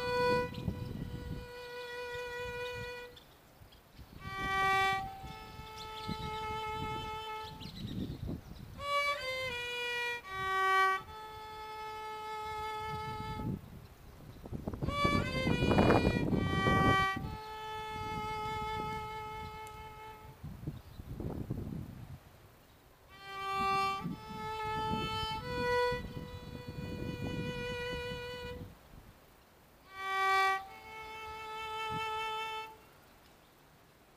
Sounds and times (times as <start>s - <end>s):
Violin, fiddle: 0.0s - 3.3s, 4.0s - 20.9s, 23.1s - 28.9s, 29.8s - 33.1s.